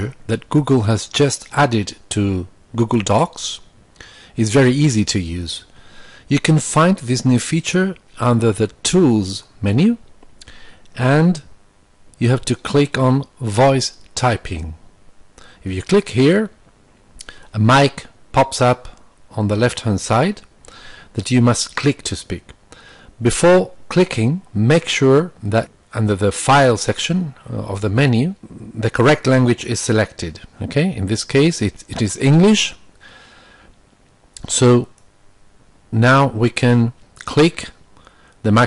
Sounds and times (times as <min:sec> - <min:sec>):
Narration, monologue: 0:00.0 - 0:38.6.